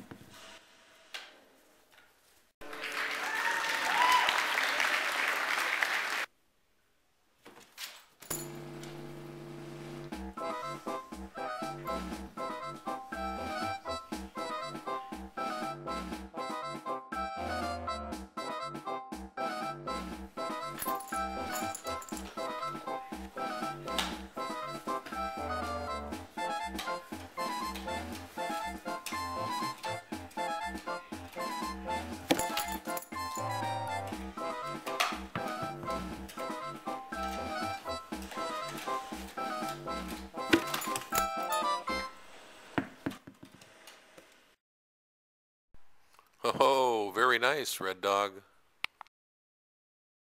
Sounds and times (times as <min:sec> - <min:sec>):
Music: 0:10.1 - 0:42.2.